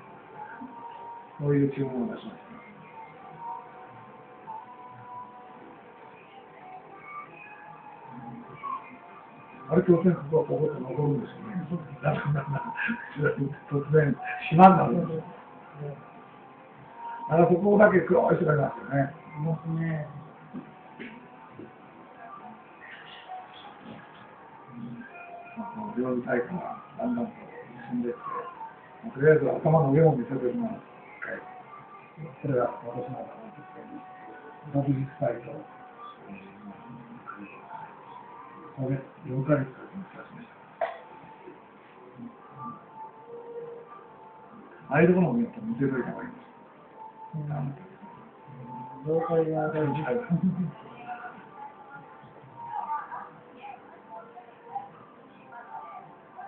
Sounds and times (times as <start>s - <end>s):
Music: 0.0s - 56.4s
Speech: 1.4s - 2.4s, 9.7s - 16.0s, 17.2s - 20.3s, 24.8s - 31.5s, 44.9s - 46.4s, 47.4s - 56.4s.